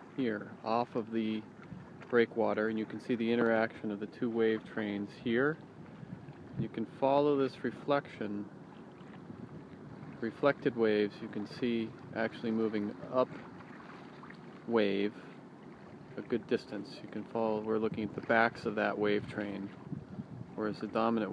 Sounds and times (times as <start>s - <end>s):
Stream: 0.0s - 21.3s
Speech: 0.2s - 1.5s, 2.1s - 5.6s, 6.6s - 8.5s, 10.2s - 13.4s, 14.7s - 15.2s, 16.2s - 19.8s, 20.6s - 21.3s.